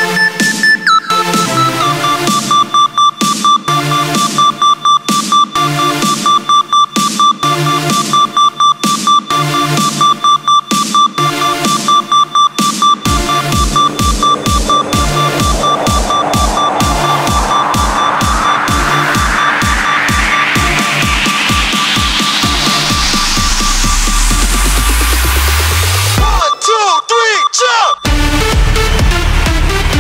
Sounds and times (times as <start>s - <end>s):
Music: 0.0s - 26.6s, 28.0s - 30.0s.